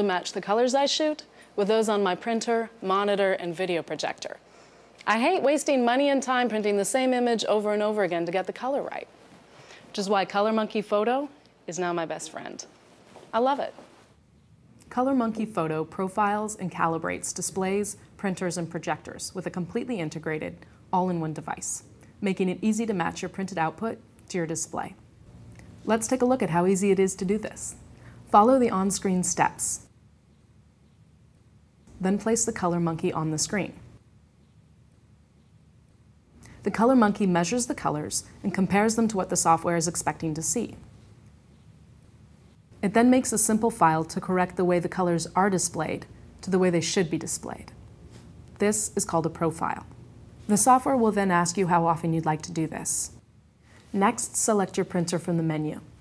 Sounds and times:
Speech: 0:00.0 - 0:04.4, 0:05.0 - 0:09.1, 0:09.9 - 0:12.7, 0:13.3 - 0:13.8, 0:14.9 - 0:25.0, 0:25.8 - 0:29.9, 0:32.0 - 0:33.8, 0:36.5 - 0:40.8, 0:42.8 - 0:47.8, 0:48.6 - 0:49.9, 0:50.5 - 0:53.2, 0:53.9 - 0:56.0.

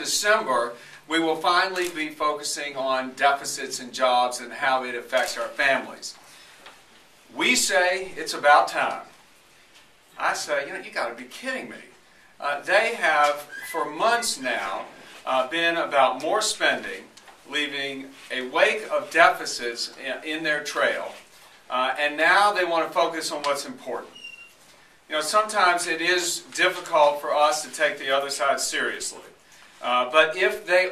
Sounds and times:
Speech: 0:00.0 - 0:06.2, 0:07.3 - 0:09.2, 0:10.2 - 0:24.2, 0:25.1 - 0:30.9.

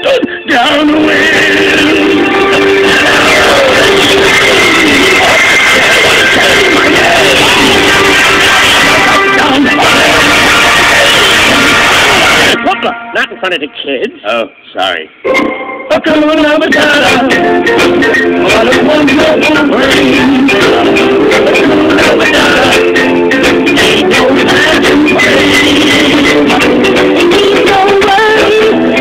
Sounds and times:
Singing: 0:00.0 - 0:12.6, 0:15.9 - 0:29.0.

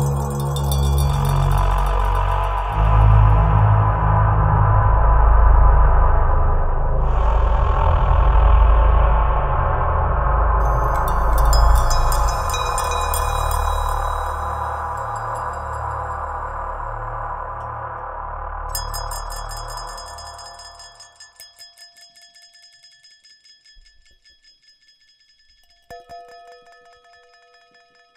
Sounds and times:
Glass: 0:00.0 - 0:02.8, 0:10.6 - 0:16.3, 0:18.8 - 0:28.1
Music: 0:00.0 - 0:28.1.

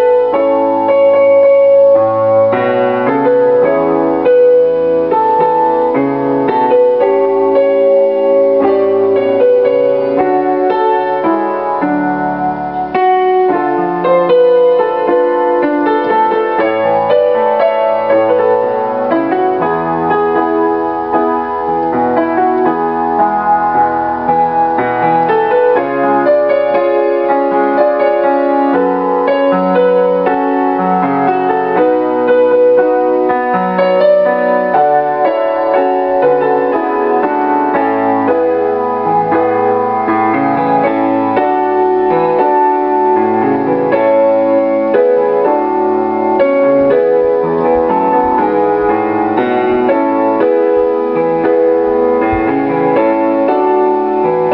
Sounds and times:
Music: 0:00.0 - 0:54.5.

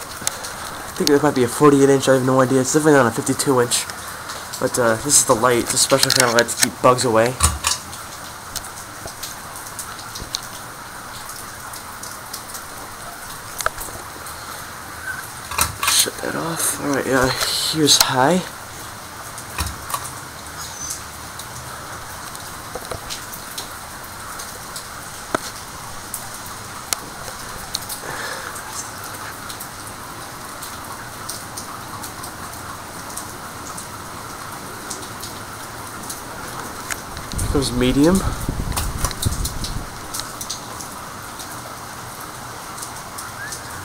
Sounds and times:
Speech: 0:01.0 - 0:03.9, 0:04.6 - 0:07.4, 0:15.9 - 0:18.5, 0:37.4 - 0:38.4.

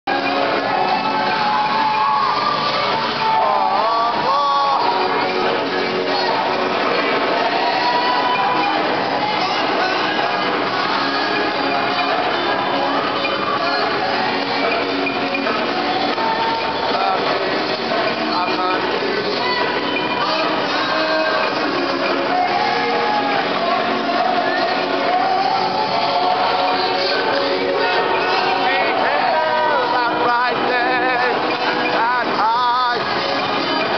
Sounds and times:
Choir: 0:00.1 - 0:32.2
Whoop: 0:00.7 - 0:05.0.

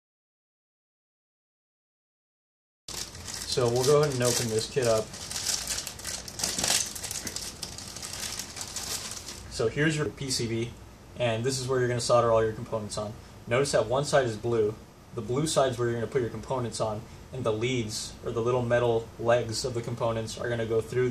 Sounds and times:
Speech: 0:03.5 - 0:05.1, 0:09.5 - 0:21.1.

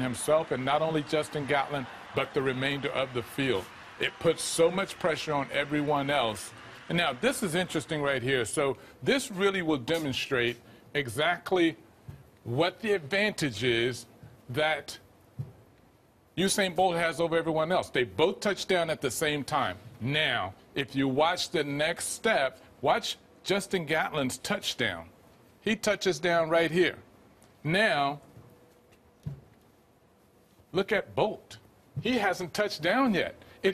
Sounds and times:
Speech: 0:00.0 - 0:11.8, 0:12.4 - 0:15.1, 0:16.4 - 0:28.3, 0:30.7 - 0:33.7.

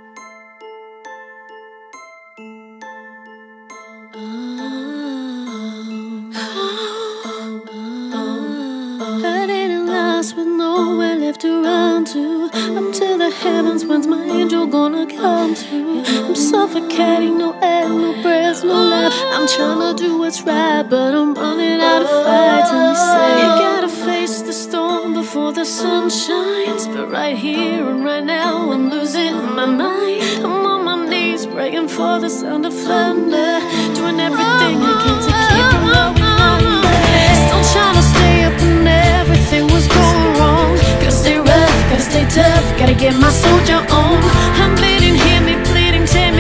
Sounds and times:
Music: 0:00.0 - 0:46.4.

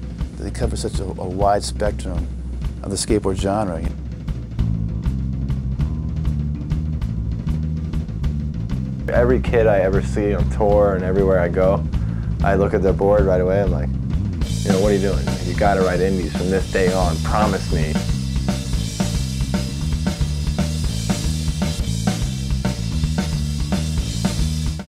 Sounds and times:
Music: 0:00.0 - 0:24.9
Speech: 0:00.4 - 0:04.0, 0:09.1 - 0:13.9, 0:14.6 - 0:18.0.

